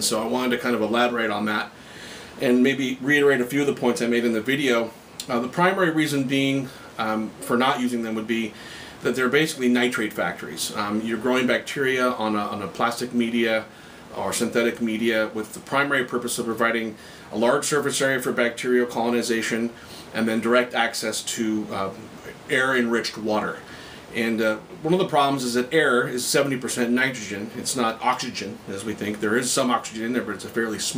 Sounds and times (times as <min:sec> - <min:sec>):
Speech: 0:00.0 - 0:01.8, 0:02.4 - 0:30.9.